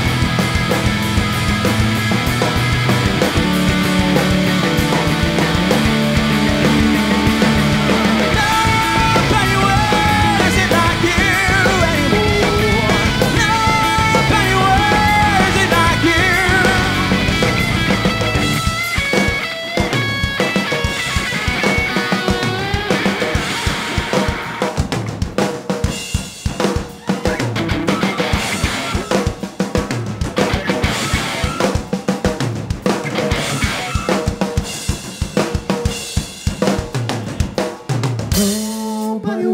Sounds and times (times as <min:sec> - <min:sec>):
Bass drum: 0:00.0 - 0:19.0
Drum roll: 0:00.0 - 0:39.0
Drum kit: 0:00.0 - 0:39.2.